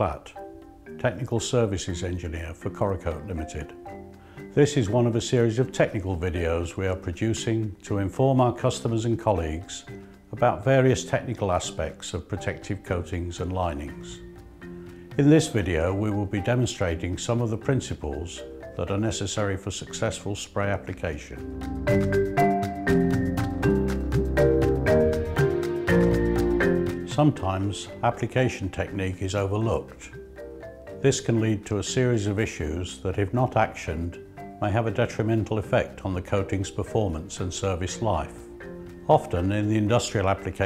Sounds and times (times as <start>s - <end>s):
Speech: 0.0s - 0.4s, 1.0s - 3.8s, 4.6s - 14.2s, 15.2s - 21.4s, 27.1s - 30.2s, 31.0s - 38.4s, 39.1s - 40.6s
Music: 0.0s - 40.6s.